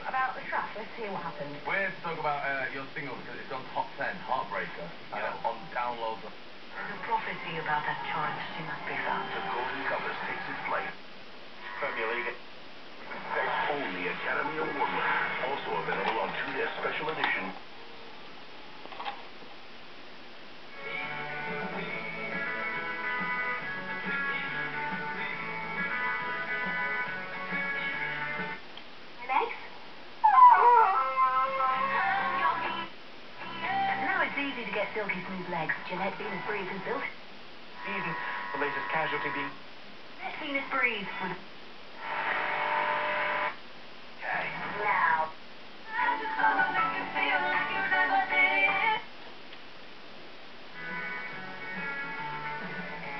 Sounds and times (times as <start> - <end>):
Radio: 0.0 - 11.0, 11.6 - 17.7, 31.8 - 37.2, 37.8 - 39.6, 40.2 - 43.6
Music: 4.6 - 11.0, 13.1 - 16.6, 20.7 - 28.6, 31.6 - 37.1, 45.9 - 49.1, 50.8 - 53.2.